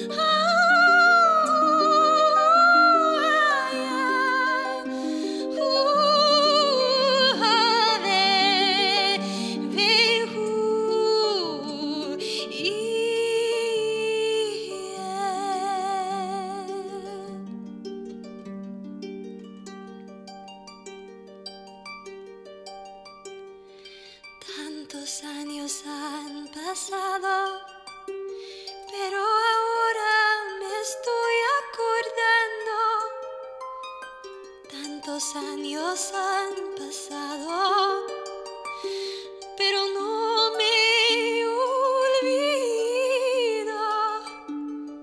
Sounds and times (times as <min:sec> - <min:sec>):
Harp: 0:00.0 - 0:45.0.